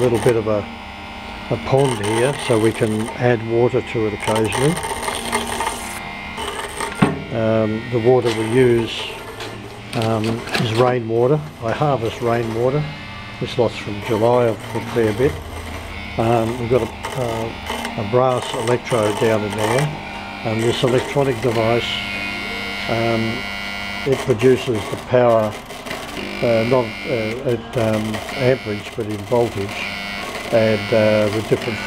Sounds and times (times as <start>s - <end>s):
Power tool: 0.0s - 31.8s.